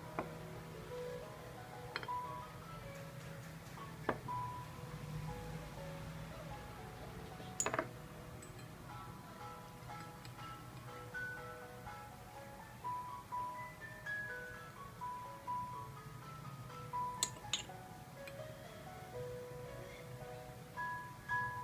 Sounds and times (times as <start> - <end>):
Inside, small room: 0.0 - 21.6
Music: 0.0 - 21.6.